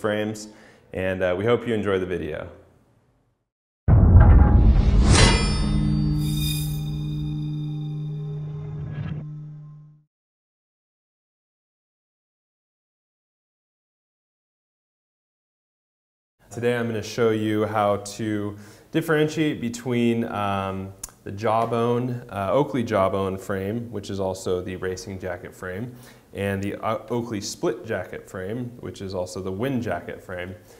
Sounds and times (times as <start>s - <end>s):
Speech: 0.0s - 2.6s, 16.5s - 30.6s.